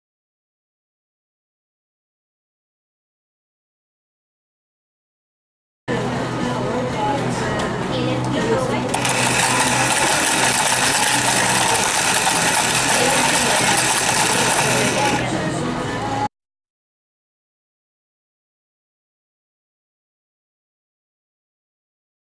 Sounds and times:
Speech: 0:05.9 - 0:16.2
Music: 0:05.9 - 0:16.3.

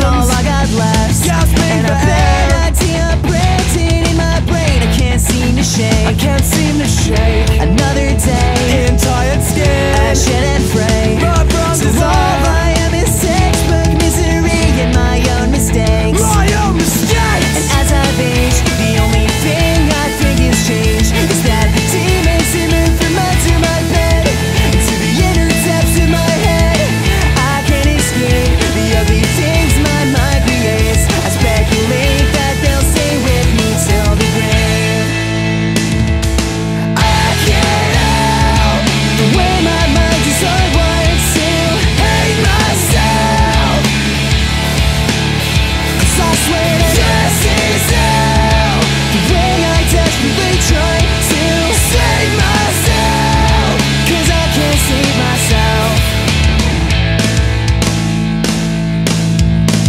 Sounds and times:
Bass guitar: 0:00.0 - 0:59.8
Electric guitar: 0:00.0 - 0:59.8.

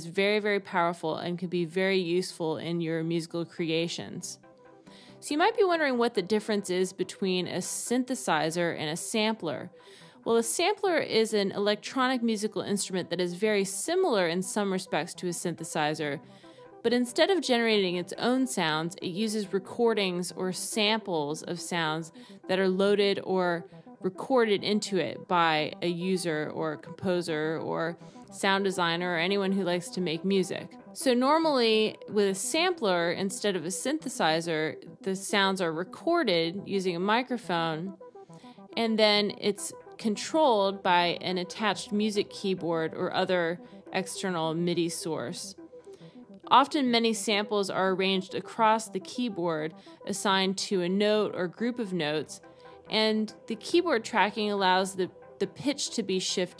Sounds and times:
Speech: 0:00.0 - 0:04.4, 0:05.2 - 0:09.7, 0:10.3 - 0:16.2, 0:16.9 - 0:37.9, 0:38.8 - 0:45.5, 0:46.5 - 0:56.5
Music: 0:00.0 - 0:56.5.

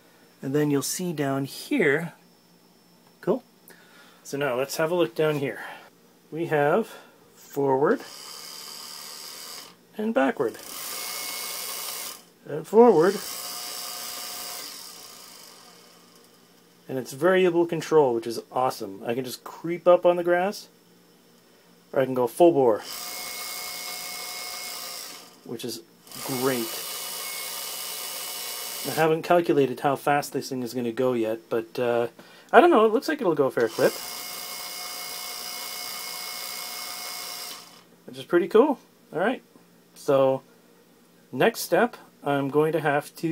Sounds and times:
Speech: 0:00.4 - 0:02.2, 0:03.2 - 0:03.5, 0:04.3 - 0:05.7, 0:06.3 - 0:08.1, 0:10.0 - 0:10.6, 0:12.5 - 0:13.2, 0:16.9 - 0:20.7, 0:21.9 - 0:22.8, 0:25.5 - 0:26.8, 0:28.9 - 0:34.0, 0:38.1 - 0:40.5, 0:41.3 - 0:43.3.

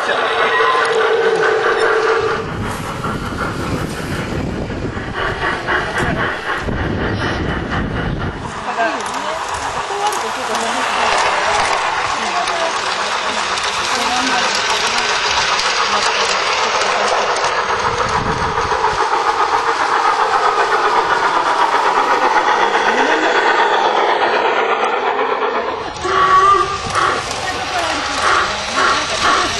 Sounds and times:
Railroad car, train wagon: 0:00.0 - 0:29.5
Train: 0:00.0 - 0:29.5.

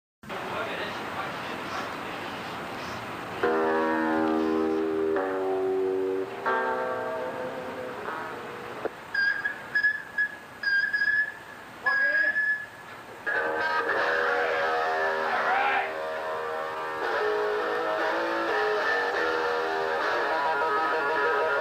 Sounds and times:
Outside, urban or manmade: 0:00.2 - 0:21.6
Speech: 0:00.3 - 0:02.5, 0:11.8 - 0:12.4
Guitar: 0:03.3 - 0:21.6.

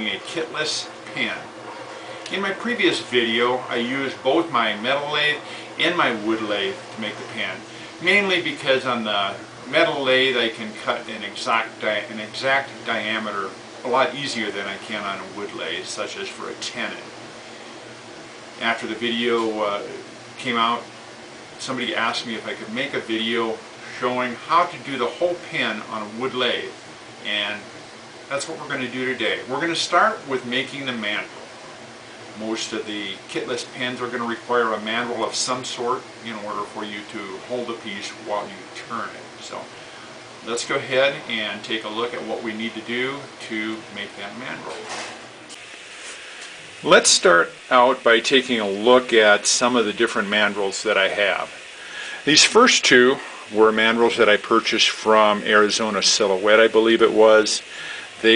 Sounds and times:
Speech: 0:00.0 - 0:01.6, 0:02.3 - 0:17.2, 0:18.6 - 0:20.9, 0:21.6 - 0:27.7, 0:28.3 - 0:31.4, 0:32.4 - 0:39.8, 0:40.4 - 0:45.1, 0:46.8 - 0:51.6, 0:52.2 - 0:58.3.

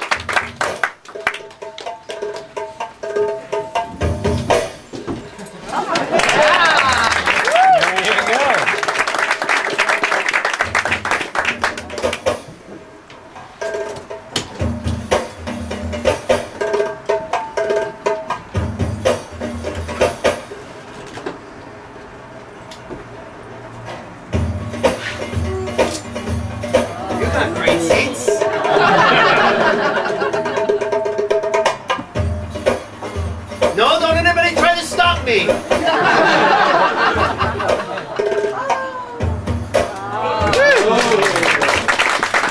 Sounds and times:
Music: 0:00.0 - 0:42.5.

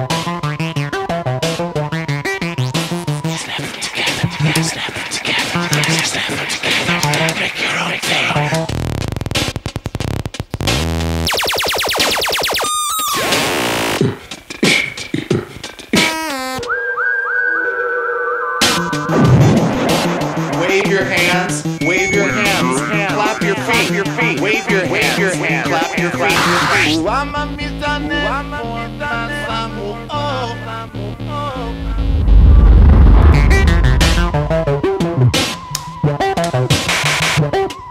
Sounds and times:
Synthesizer: 0:10.7 - 0:14.2, 0:17.1 - 0:37.6.

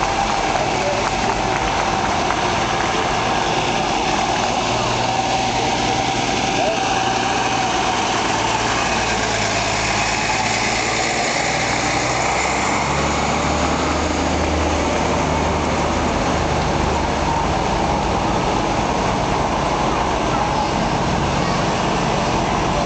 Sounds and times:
Heavy engine (low frequency): 0:00.0 - 0:22.8
Truck: 0:00.0 - 0:22.8.

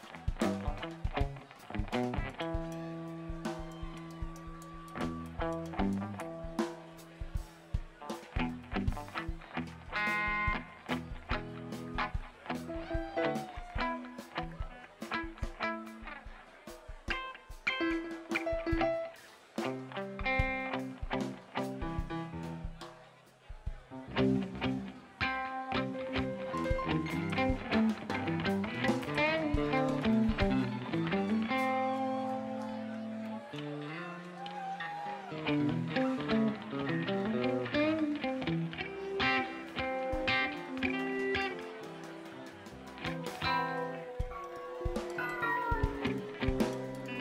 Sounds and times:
Music: 0:00.0 - 0:47.2.

